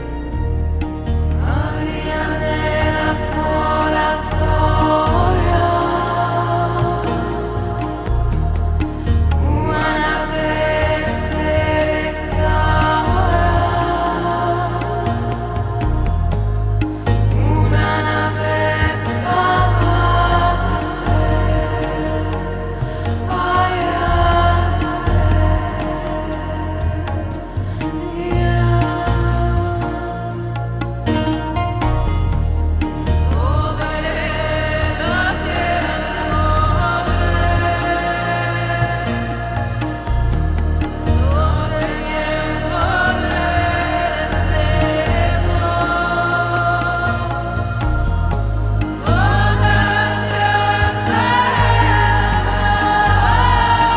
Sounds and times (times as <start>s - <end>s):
New-age music: 0.0s - 53.9s
Mantra: 1.4s - 8.8s, 9.4s - 15.8s, 17.4s - 30.6s, 33.4s - 48.4s, 49.0s - 53.9s.